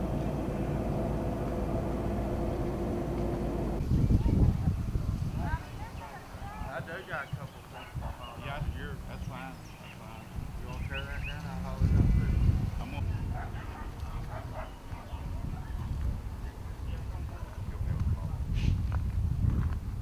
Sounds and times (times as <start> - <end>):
Speech: 5.4 - 13.3.